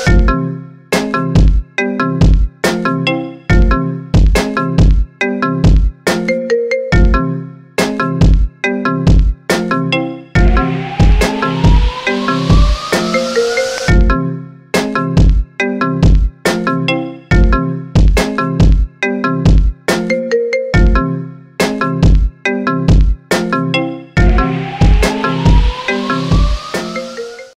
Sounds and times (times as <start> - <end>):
Marimba, xylophone: 5.3 - 7.4, 12.7 - 14.2, 19.0 - 21.2
Glockenspiel: 6.2 - 7.5, 20.0 - 21.2.